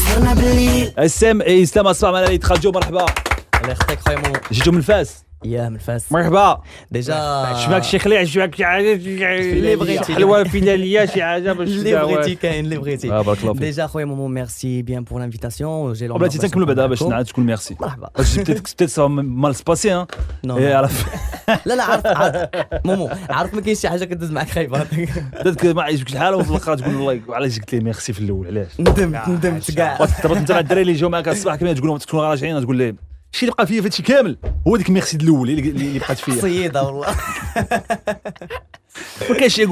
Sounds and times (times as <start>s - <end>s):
Speech: 1.0s - 21.1s, 21.7s - 37.2s, 39.2s - 39.7s.